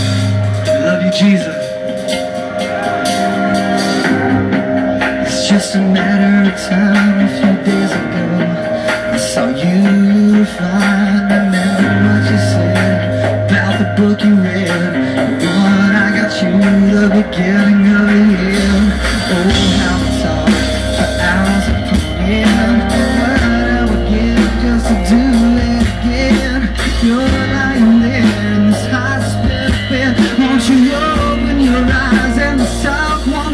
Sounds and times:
Music: 0:00.0 - 0:33.5.

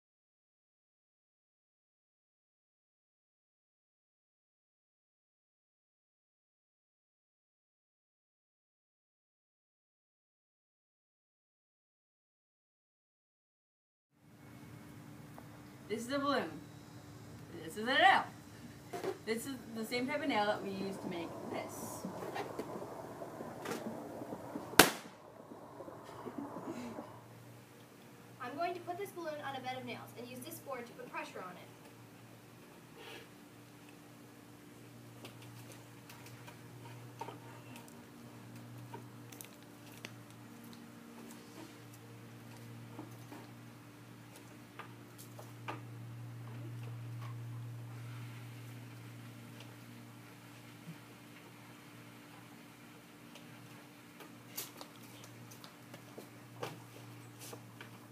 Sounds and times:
Speech: 0:19.3 - 0:22.0, 0:28.4 - 0:31.8.

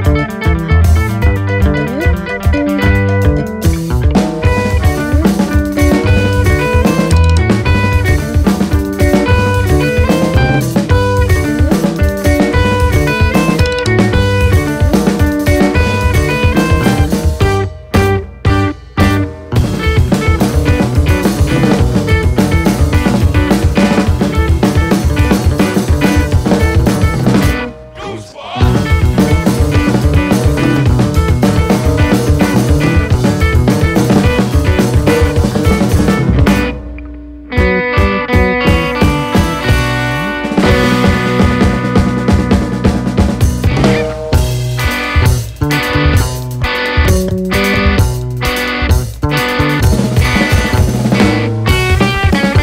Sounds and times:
Music: 0:00.0 - 0:52.6.

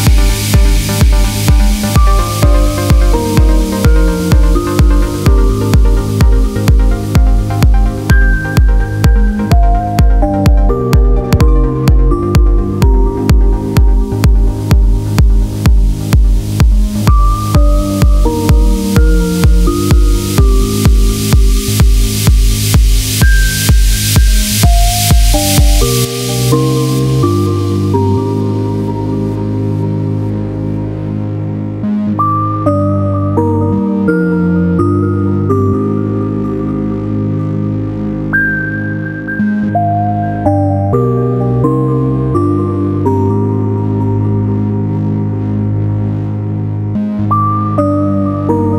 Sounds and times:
Ambient music: 0:00.0 - 0:48.7.

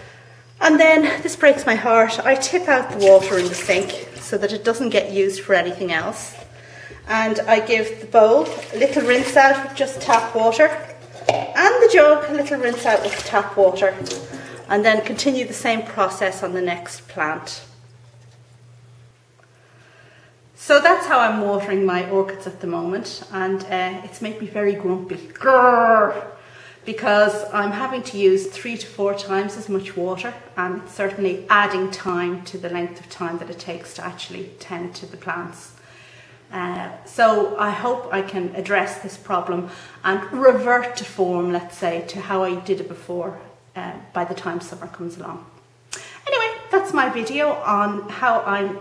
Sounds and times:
Speech: 0:00.6 - 0:10.9, 0:11.6 - 0:17.8, 0:20.6 - 0:26.3, 0:26.9 - 0:35.8, 0:36.5 - 0:45.6, 0:46.2 - 0:48.8.

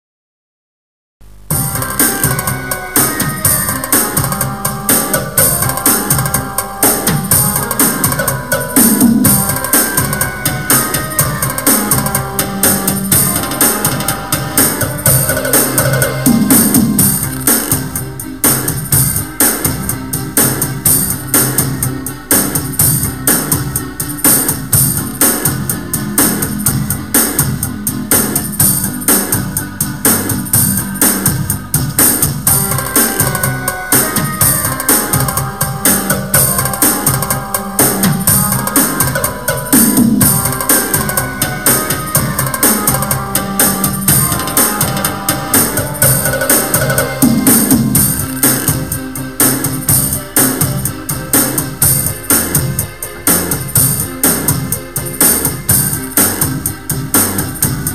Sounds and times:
Background music: 0:01.3 - 0:57.9
Video game music: 0:01.5 - 0:57.9.

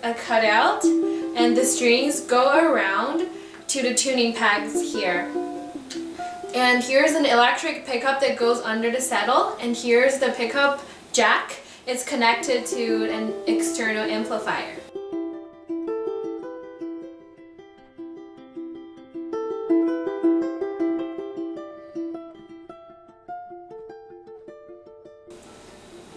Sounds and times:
Speech: 0:00.0 - 0:05.3, 0:06.5 - 0:14.9
Music: 0:00.0 - 0:07.8, 0:12.1 - 0:26.1
Inside, small room: 0:00.0 - 0:26.1.

